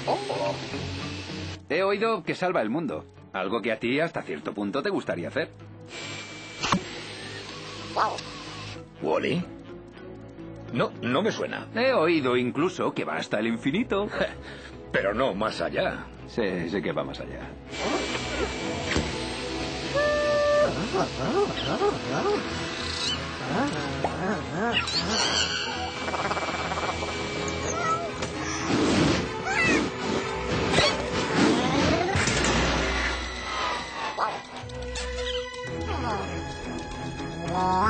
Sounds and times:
Music: 0.0s - 37.9s.

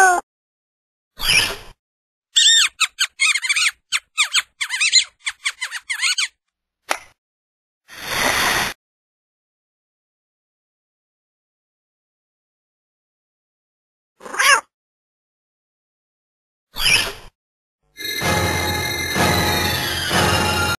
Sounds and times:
Meow: 14.2s - 14.7s
Music: 18.0s - 20.7s.

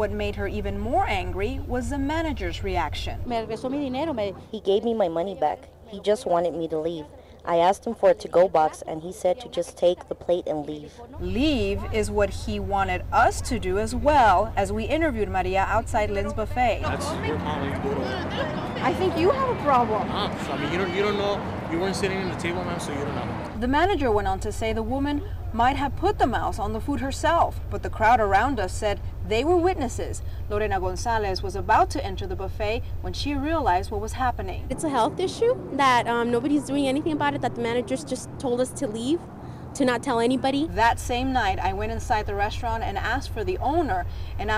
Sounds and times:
Speech: 0.0s - 39.2s, 39.8s - 44.5s.

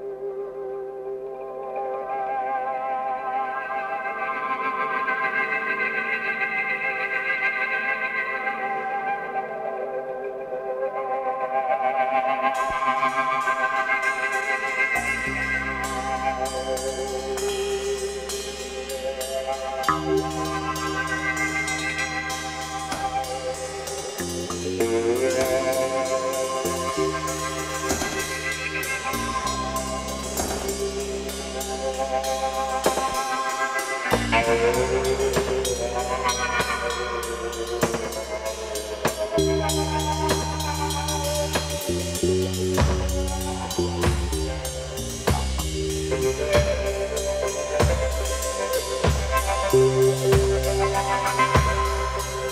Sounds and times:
Didgeridoo: 0.0s - 52.5s.

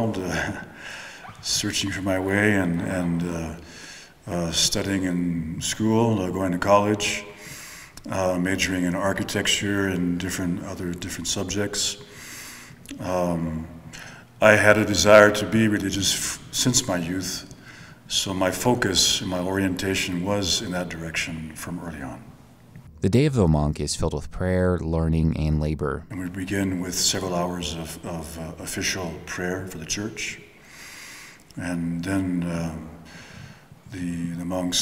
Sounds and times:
Speech: 0.0s - 0.7s, 1.4s - 3.6s, 4.2s - 7.4s, 8.0s - 12.1s, 12.9s - 13.8s, 14.4s - 17.5s, 18.1s - 22.3s, 23.0s - 30.5s, 31.6s - 33.0s, 33.9s - 34.8s.

